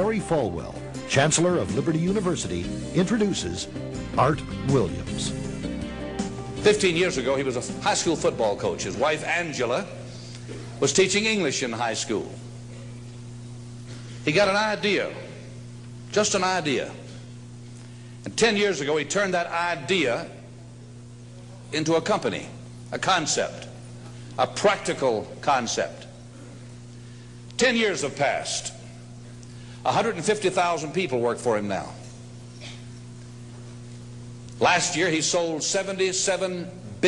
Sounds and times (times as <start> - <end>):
Male speech, man speaking: 0.0 - 5.4, 6.6 - 10.0, 10.8 - 12.4, 14.3 - 15.4, 16.1 - 17.1, 18.3 - 20.5, 21.6 - 23.8, 24.4 - 26.2, 27.6 - 28.8, 29.8 - 32.0, 34.6 - 37.0
Narration, monologue: 0.0 - 37.0.